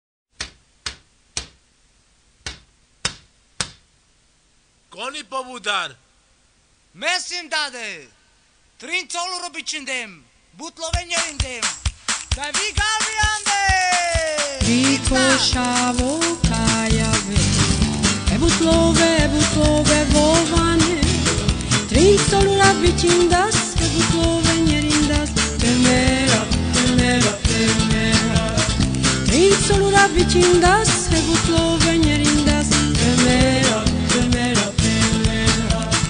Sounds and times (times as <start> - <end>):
Music: 10.9 - 36.0.